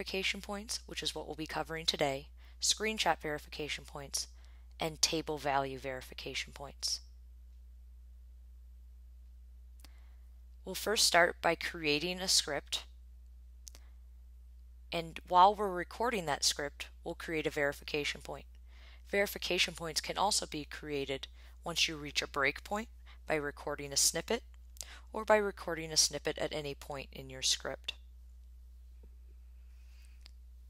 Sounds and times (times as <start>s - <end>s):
Speech: 0.0s - 7.0s, 10.7s - 12.9s, 15.0s - 18.5s, 19.1s - 24.4s, 25.1s - 28.0s.